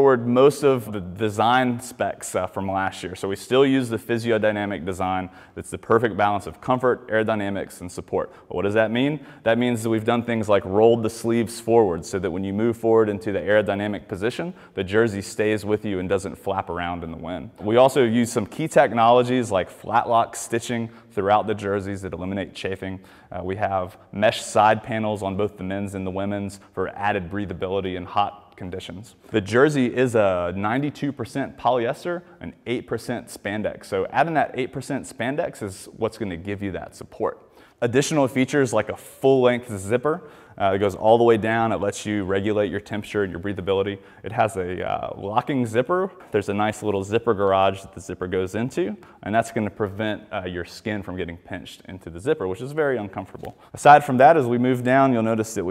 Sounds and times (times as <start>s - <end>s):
Speech: 0.0s - 55.7s.